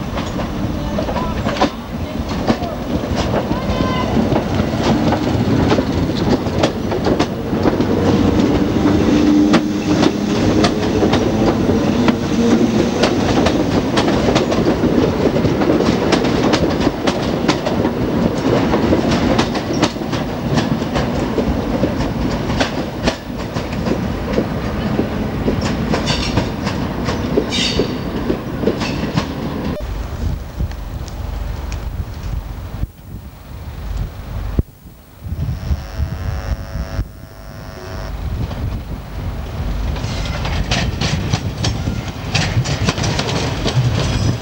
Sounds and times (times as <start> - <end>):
Clickety-clack: 0.0 - 29.8, 39.9 - 44.4
Subway, metro, underground: 0.0 - 32.8, 38.4 - 44.4
Railroad car, train wagon: 0.0 - 34.6, 38.2 - 44.4
Train: 0.0 - 34.6, 38.2 - 44.4.